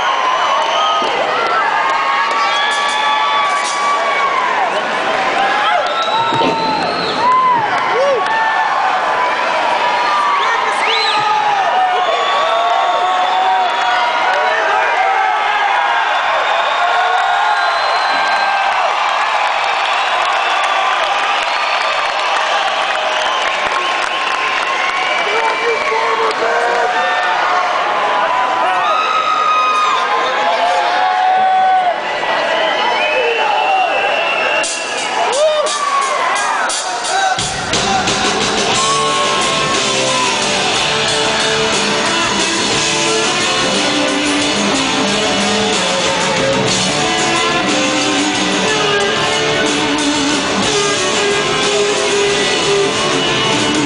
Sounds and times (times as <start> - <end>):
Cheering: 0.0 - 53.8
Crowd: 0.0 - 53.8.